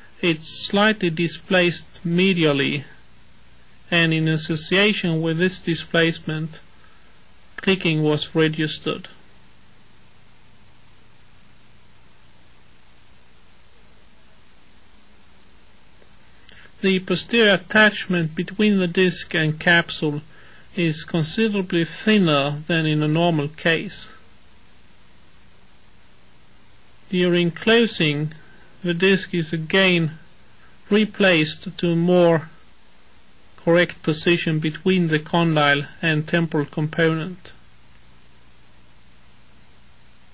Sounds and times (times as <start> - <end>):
Speech: 0.2 - 3.0, 3.9 - 6.7, 7.6 - 9.2, 16.6 - 24.2, 27.1 - 30.3, 30.9 - 32.6, 33.6 - 37.6.